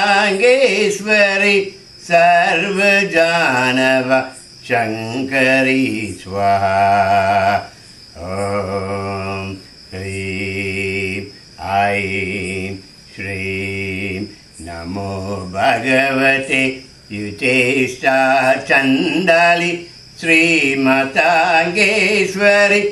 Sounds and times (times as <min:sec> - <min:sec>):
Mantra: 0:00.0 - 0:22.9.